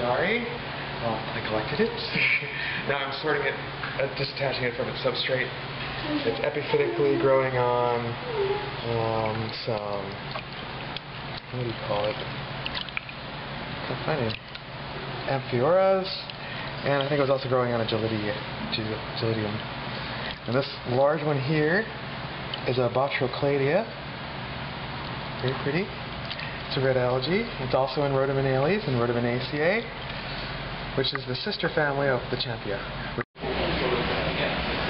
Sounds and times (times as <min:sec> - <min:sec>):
Speech: 0:00.0 - 0:10.2, 0:11.5 - 0:12.2, 0:13.9 - 0:14.4, 0:20.5 - 0:22.0, 0:22.6 - 0:24.0, 0:25.4 - 0:26.0, 0:26.7 - 0:29.9, 0:31.0 - 0:34.9.